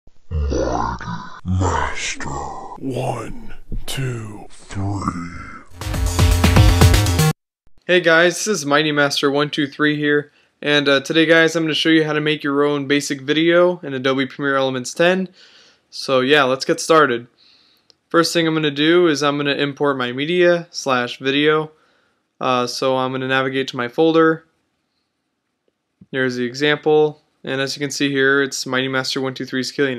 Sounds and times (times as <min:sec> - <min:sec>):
Inside, small room: 0:00.2 - 0:29.9
Speech: 0:00.4 - 0:05.7, 0:07.9 - 0:17.3, 0:18.1 - 0:21.7, 0:22.4 - 0:24.4, 0:26.0 - 0:29.9
Music: 0:05.7 - 0:07.4.